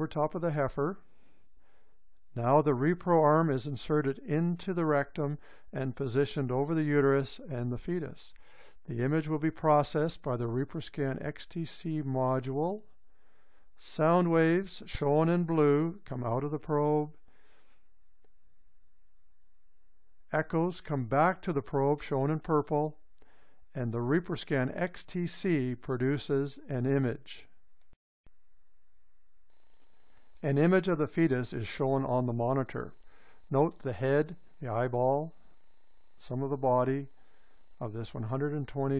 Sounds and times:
Speech: 0:00.0 - 0:01.0, 0:02.4 - 0:12.9, 0:13.8 - 0:17.2, 0:20.3 - 0:23.0, 0:23.7 - 0:27.5, 0:30.4 - 0:32.9, 0:33.5 - 0:35.4, 0:36.2 - 0:37.1, 0:37.8 - 0:38.9.

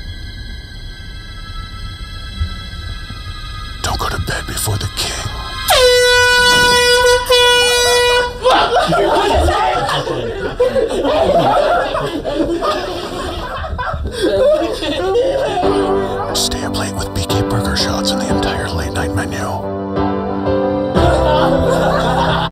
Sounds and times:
Speech: 0:03.8 - 0:05.7, 0:15.6 - 0:19.7
Music: 0:15.6 - 0:22.5.

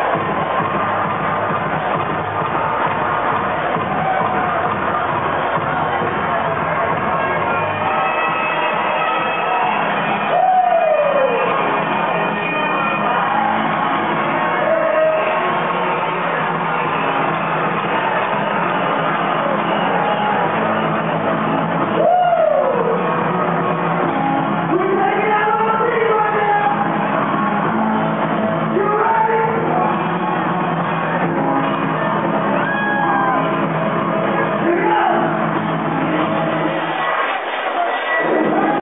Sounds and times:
Inside, large room or hall: 0:00.0 - 0:38.8
Music: 0:00.0 - 0:38.8
Speech: 0:24.7 - 0:26.9, 0:28.7 - 0:29.8, 0:34.4 - 0:35.4.

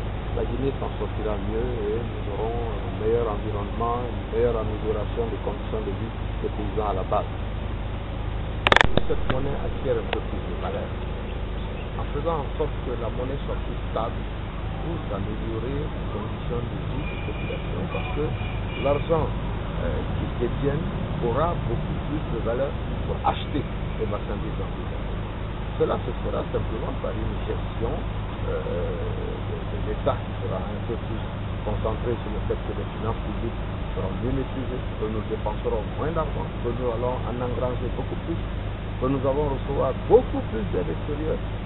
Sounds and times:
Outside, rural or natural: 0:00.0 - 0:41.6
Speech: 0:00.4 - 0:07.3, 0:09.0 - 0:10.9, 0:12.0 - 0:14.2, 0:14.8 - 0:25.0, 0:25.8 - 0:38.4, 0:39.0 - 0:41.4.

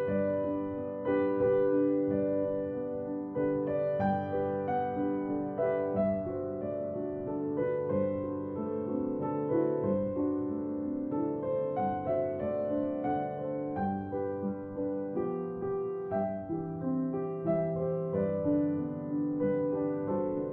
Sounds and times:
Music: 0:00.0 - 0:20.5.

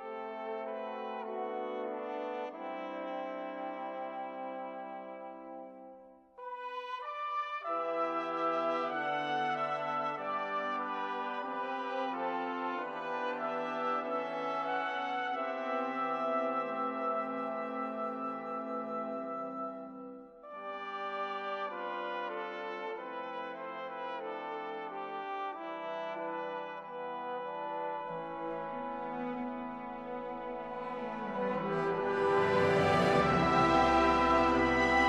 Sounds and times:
Music: 0:00.0 - 0:35.0.

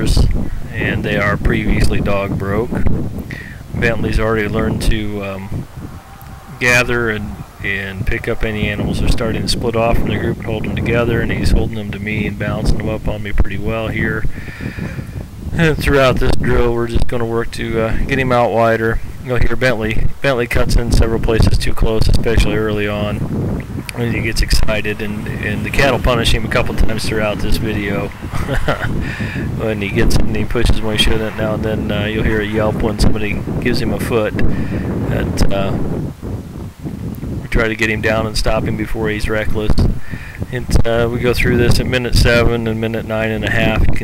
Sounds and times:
Speech: 0:00.0 - 0:02.8, 0:03.8 - 0:05.6, 0:06.6 - 0:14.2, 0:15.6 - 0:23.2, 0:23.9 - 0:28.2, 0:29.6 - 0:34.4, 0:35.1 - 0:35.9, 0:37.5 - 0:44.0.

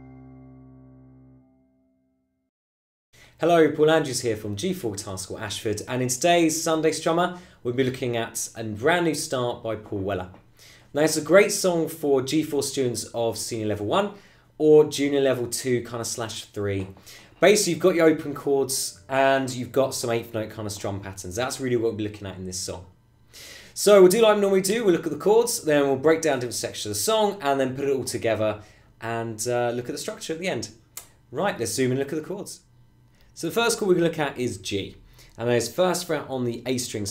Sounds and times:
Speech: 0:03.4 - 0:22.9, 0:23.8 - 0:32.7, 0:33.4 - 0:37.1.

